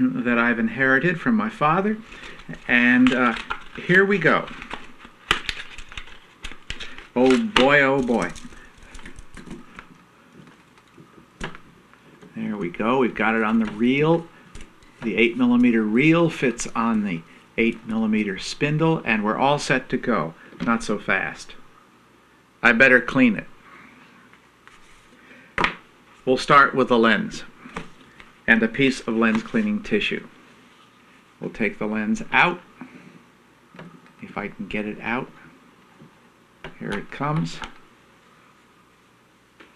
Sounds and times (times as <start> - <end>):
Speech: 0.0 - 4.6, 7.2 - 8.4, 12.3 - 14.3, 15.0 - 21.6, 22.6 - 23.6, 26.2 - 27.6, 28.5 - 30.3, 31.4 - 32.7, 34.2 - 35.5, 36.7 - 37.8.